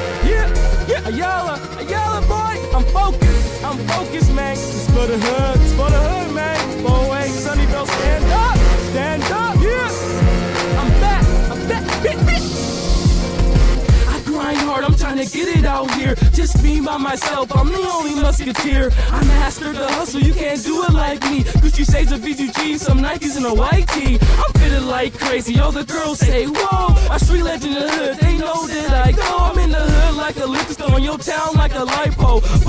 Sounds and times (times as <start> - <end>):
Music: 0.0 - 32.6.